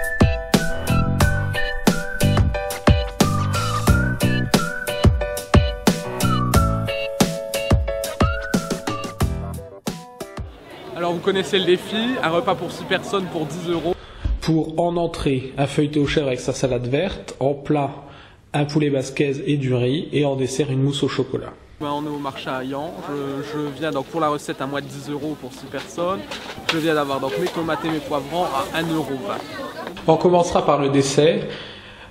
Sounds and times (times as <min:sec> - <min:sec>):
Speech: 0:10.6 - 0:18.0, 0:18.6 - 0:31.5.